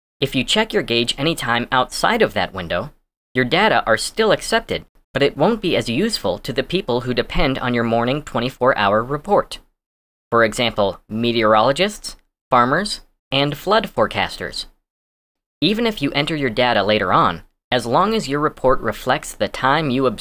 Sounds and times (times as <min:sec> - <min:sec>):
Speech: 0:00.2 - 0:09.7, 0:10.3 - 0:14.8, 0:15.6 - 0:20.2.